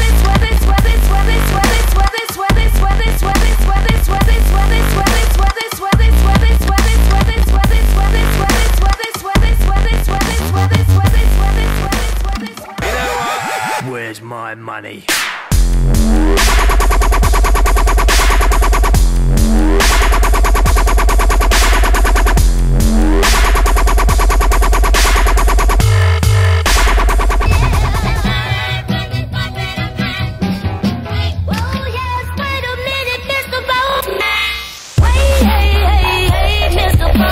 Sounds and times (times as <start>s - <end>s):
Dubstep: 0.0s - 14.2s, 15.1s - 28.8s, 33.7s - 37.3s.